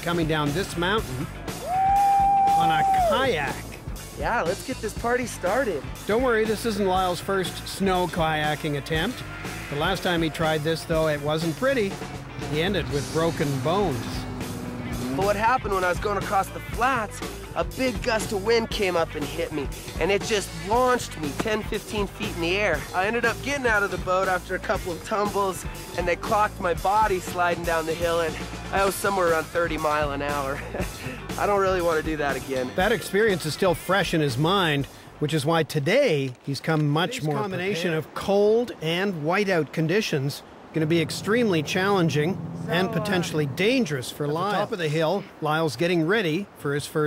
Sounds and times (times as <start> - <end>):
Music: 0.0 - 35.3
Speech: 4.2 - 11.9, 15.2 - 30.7, 31.3 - 47.0.